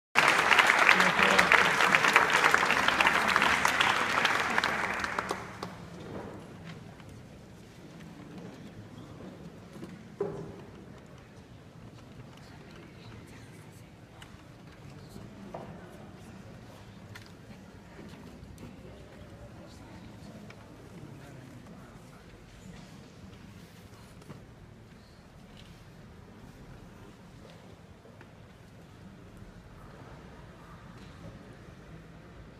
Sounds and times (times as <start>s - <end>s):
Applause: 0.1s - 6.2s
Speech: 0.8s - 5.8s, 10.4s - 24.0s.